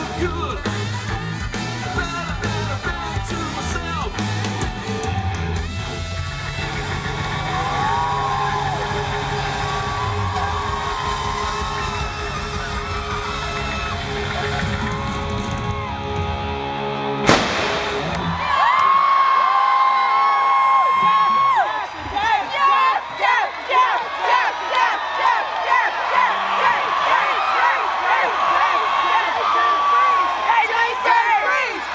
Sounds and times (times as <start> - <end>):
Whoop: 7.4 - 16.4, 18.2 - 21.9.